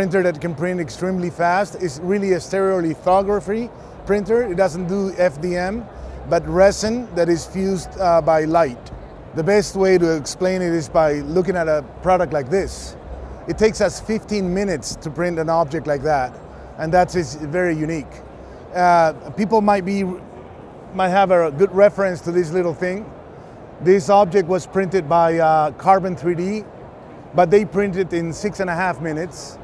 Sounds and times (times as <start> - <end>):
Speech: 0.0 - 20.2, 21.0 - 23.1, 23.8 - 26.7, 27.4 - 29.6.